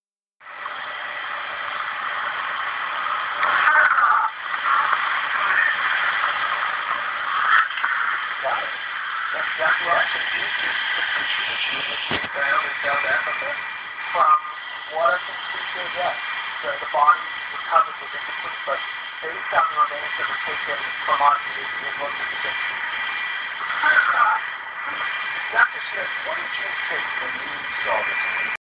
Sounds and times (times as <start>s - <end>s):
Speech: 8.4s - 8.8s, 9.4s - 22.7s, 23.6s - 28.2s.